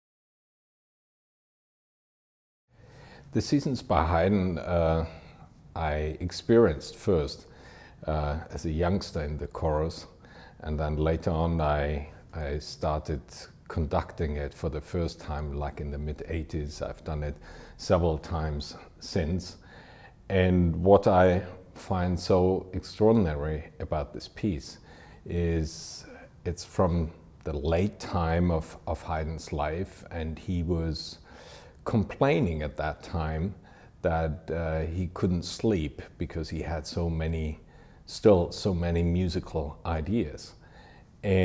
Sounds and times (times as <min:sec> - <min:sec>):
Speech: 0:03.3 - 0:19.6, 0:20.3 - 0:40.6, 0:41.2 - 0:41.4.